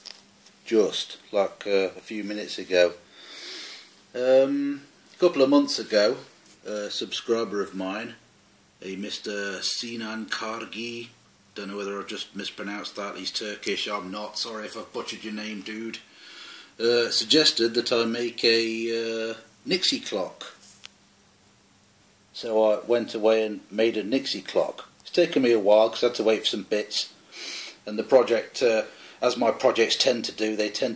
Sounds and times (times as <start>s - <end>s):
Speech: 0.6s - 3.0s, 4.1s - 8.2s, 8.8s - 16.0s, 16.8s - 20.6s, 22.4s - 27.2s, 27.8s - 30.9s.